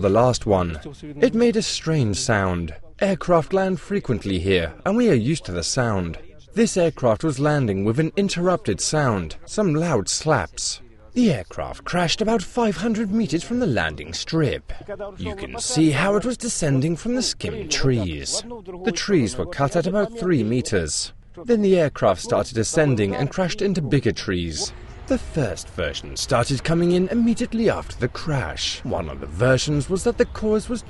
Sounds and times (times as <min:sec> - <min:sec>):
Speech: 0:00.0 - 0:30.8.